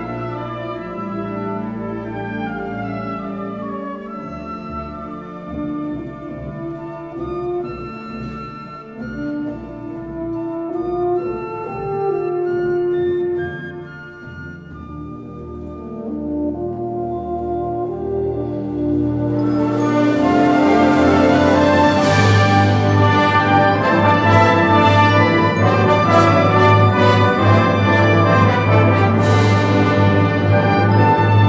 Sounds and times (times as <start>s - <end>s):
Brass instrument: 0.0s - 31.4s.